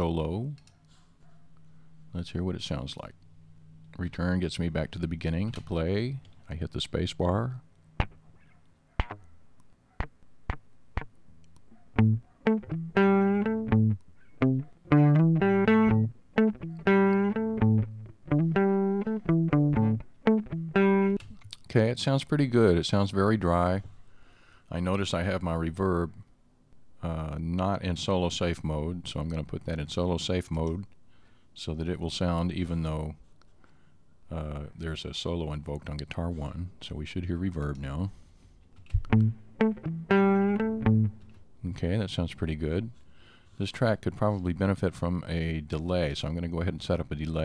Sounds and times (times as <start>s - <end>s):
Speech: 0.0s - 0.6s, 2.1s - 3.2s, 4.0s - 7.6s, 21.5s - 23.9s, 24.7s - 26.3s, 27.0s - 30.9s, 31.6s - 33.2s, 34.3s - 38.2s, 41.6s - 43.0s, 43.6s - 47.4s
Music: 12.0s - 21.2s, 39.1s - 41.2s.